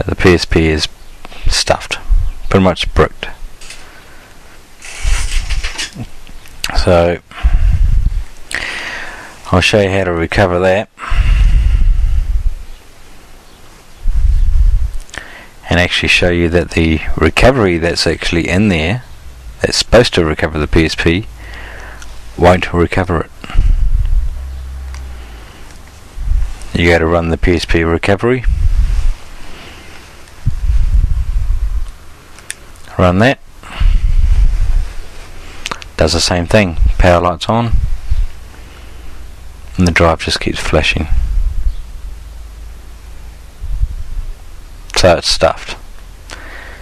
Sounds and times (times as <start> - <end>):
Speech: 0.0 - 3.4, 6.7 - 7.6, 9.4 - 11.0, 15.6 - 21.3, 22.4 - 23.6, 26.7 - 28.6, 32.9 - 33.9, 36.0 - 37.8, 39.8 - 41.2, 44.9 - 45.8.